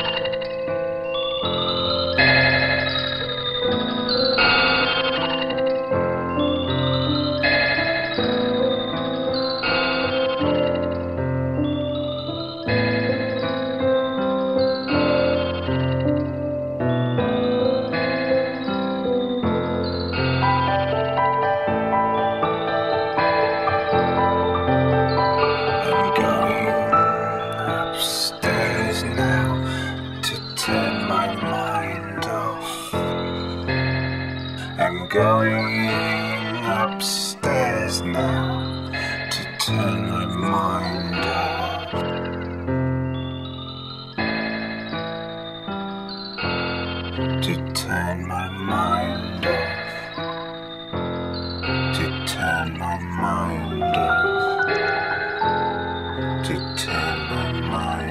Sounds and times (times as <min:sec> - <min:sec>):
Music: 0:00.0 - 0:58.1.